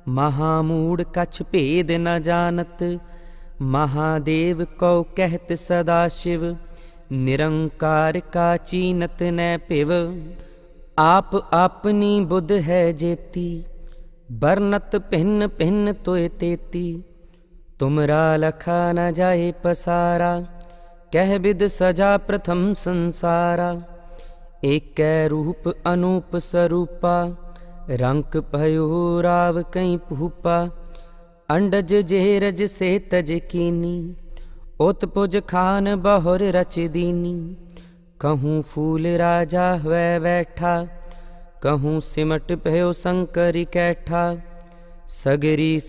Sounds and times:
Mantra: 0.0s - 3.0s, 3.6s - 10.4s, 11.0s - 13.7s, 14.3s - 17.0s, 17.8s - 20.5s, 21.1s - 23.9s, 24.6s - 30.8s, 31.5s - 34.2s, 34.8s - 37.6s, 38.2s - 41.0s, 41.6s - 44.5s, 45.1s - 45.8s.

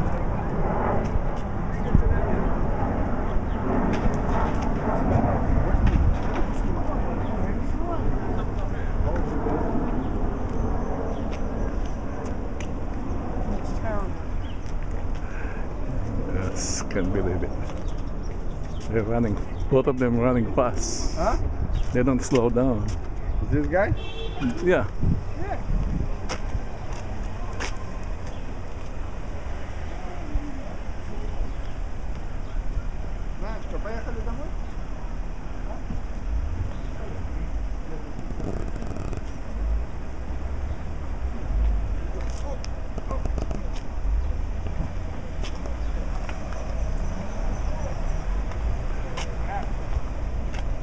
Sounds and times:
Speech: 16.2s - 17.5s, 18.8s - 25.6s.

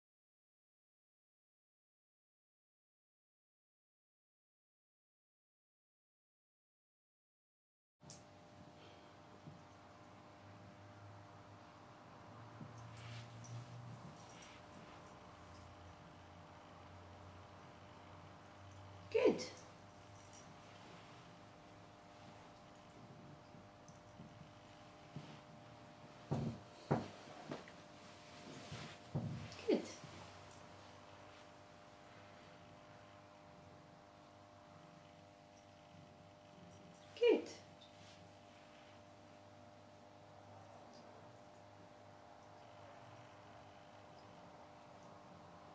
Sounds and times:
Speech: 19.1s - 19.7s, 29.5s - 30.0s, 37.2s - 37.7s.

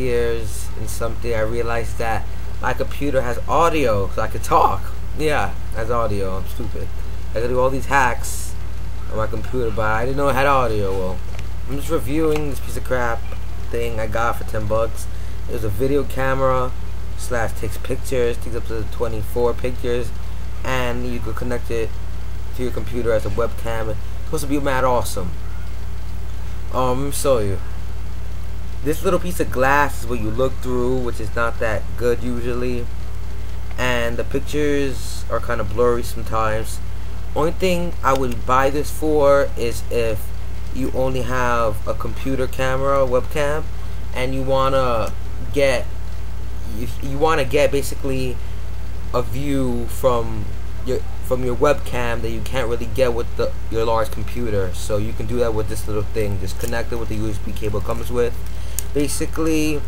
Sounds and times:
Speech: 0.0s - 21.9s, 22.5s - 25.4s, 26.7s - 27.7s, 28.8s - 32.9s, 33.8s - 36.8s, 37.4s - 45.9s, 46.7s - 48.4s, 49.1s - 59.8s.

